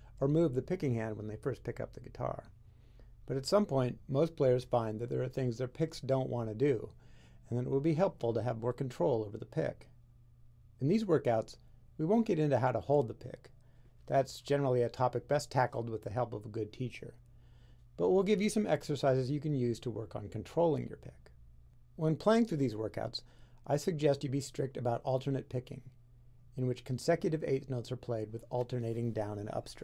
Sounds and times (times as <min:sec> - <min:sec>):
Speech: 0:00.2 - 0:02.6, 0:03.3 - 0:10.0, 0:10.8 - 0:17.2, 0:18.0 - 0:21.4, 0:22.0 - 0:29.8.